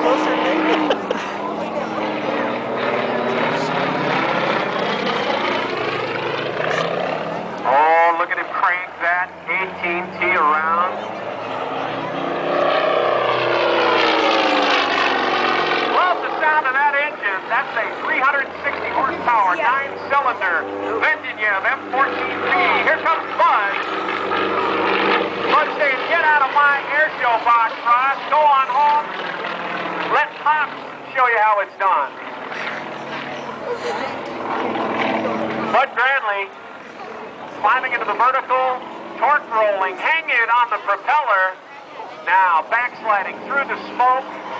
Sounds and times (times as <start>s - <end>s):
Speech: 7.6s - 11.1s, 16.0s - 23.8s, 25.5s - 29.2s, 35.7s - 44.3s.